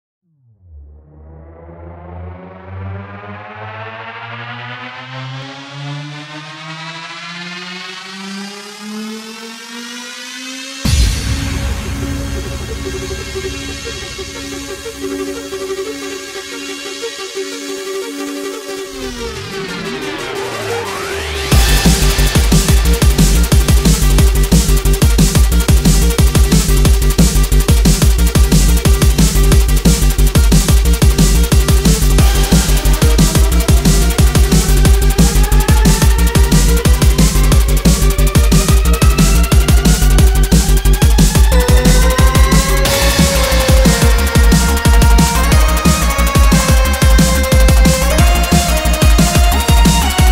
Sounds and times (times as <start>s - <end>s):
Trance music: 0.5s - 50.3s.